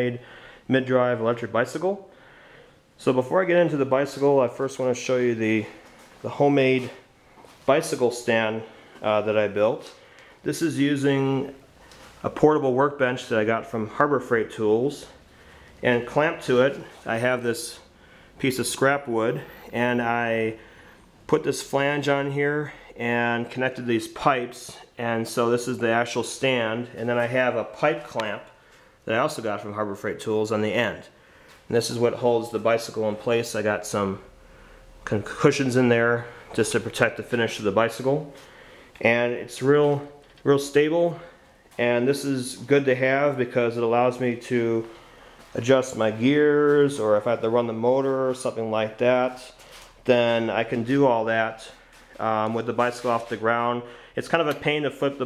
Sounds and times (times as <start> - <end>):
Speech: 0.0 - 2.1, 3.0 - 11.6, 12.2 - 15.2, 15.8 - 20.6, 21.3 - 34.3, 35.0 - 38.4, 39.0 - 45.0, 45.6 - 55.2.